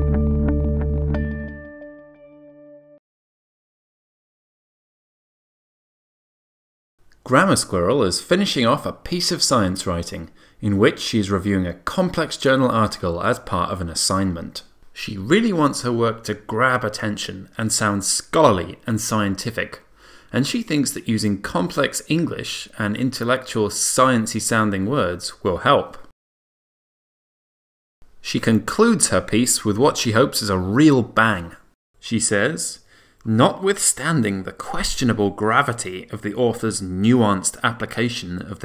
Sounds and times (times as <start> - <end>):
Speech: 7.2 - 26.1, 28.2 - 38.6.